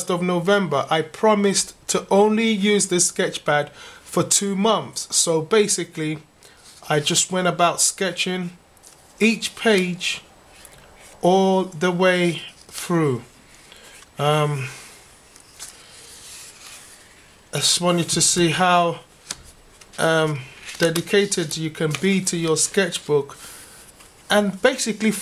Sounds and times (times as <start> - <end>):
Speech: 0.0 - 8.6, 9.2 - 10.3, 11.2 - 13.4, 14.2 - 14.8, 17.6 - 19.1, 20.0 - 23.4, 24.3 - 25.2.